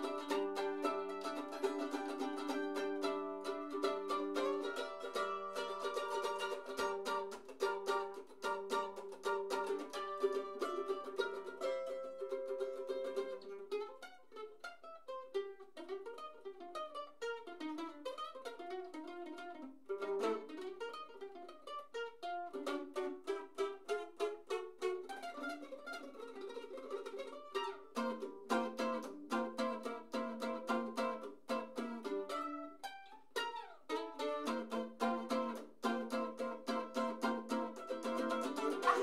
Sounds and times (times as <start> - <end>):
Mandolin: 0.0 - 39.0
Ukulele: 0.0 - 39.0.